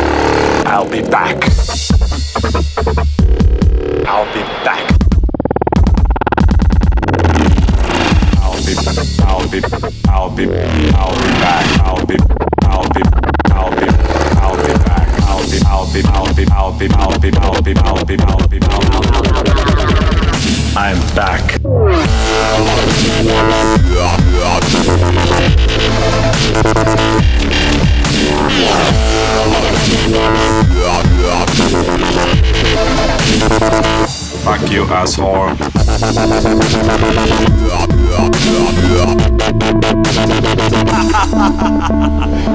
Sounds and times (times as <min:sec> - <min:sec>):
Dubstep: 0:00.0 - 0:42.5
Electronica: 0:00.0 - 0:42.5.